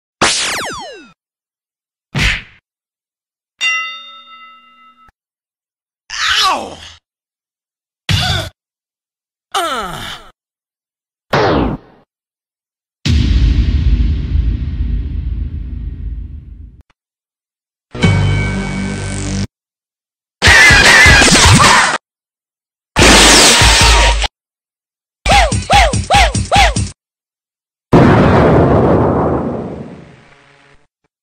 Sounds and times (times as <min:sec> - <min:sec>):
Sound effect: 0:00.2 - 0:01.2, 0:11.3 - 0:12.1, 0:13.0 - 0:16.8, 0:20.4 - 0:22.0, 0:23.0 - 0:24.3, 0:28.0 - 0:30.9.